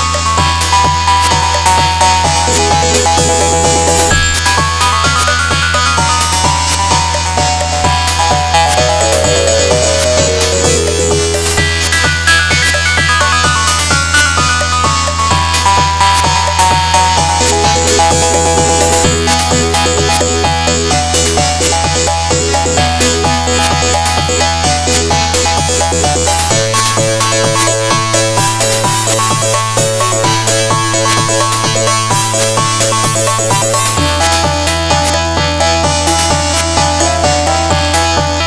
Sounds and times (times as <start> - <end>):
Soundtrack music: 0.0 - 38.4.